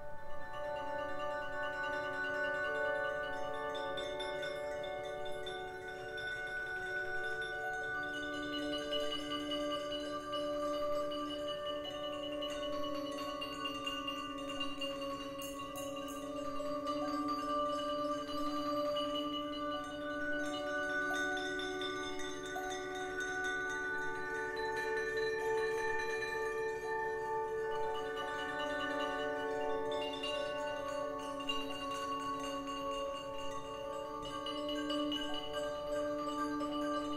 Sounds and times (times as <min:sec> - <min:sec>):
Percussion: 0:00.0 - 0:37.1.